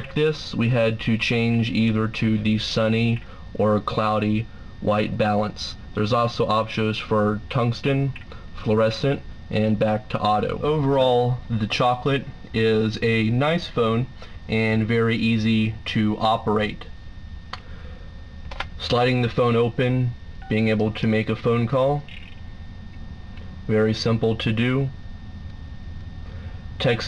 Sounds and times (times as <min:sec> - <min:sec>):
Speech: 0:00.0 - 0:16.9, 0:18.8 - 0:22.1, 0:23.7 - 0:25.0, 0:26.8 - 0:27.0.